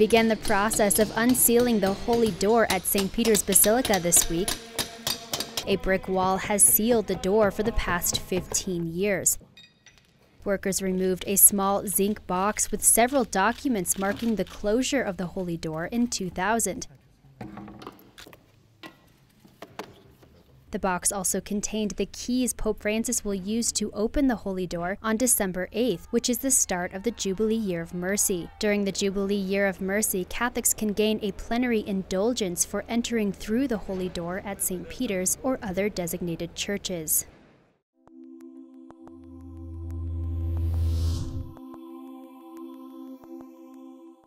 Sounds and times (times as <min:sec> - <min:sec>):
Speech: 0:00.0 - 0:04.6, 0:05.6 - 0:09.4, 0:10.5 - 0:17.2, 0:20.8 - 0:37.3
Music: 0:38.0 - 0:44.2.